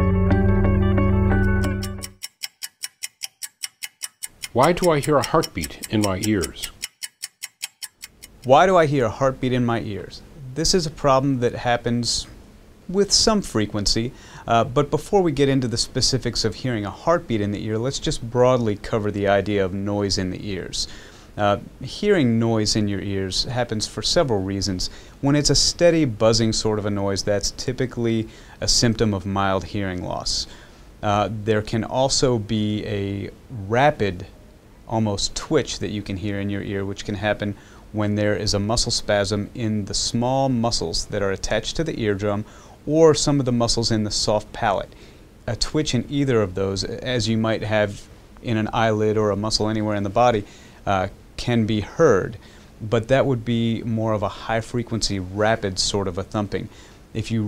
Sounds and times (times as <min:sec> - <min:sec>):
Speech: 0:04.5 - 0:06.8, 0:08.5 - 0:57.4.